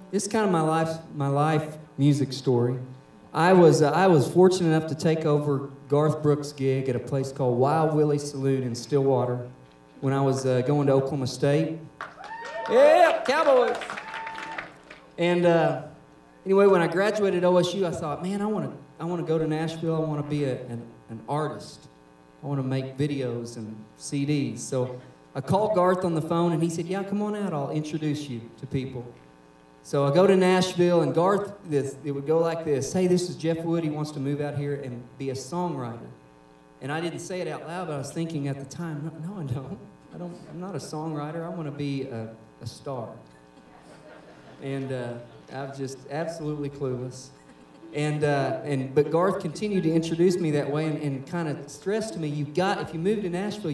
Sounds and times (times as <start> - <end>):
Speech: 0.1 - 11.9, 12.7 - 13.8, 15.2 - 29.2, 29.8 - 36.2, 36.8 - 43.2, 44.6 - 47.3, 47.9 - 53.7.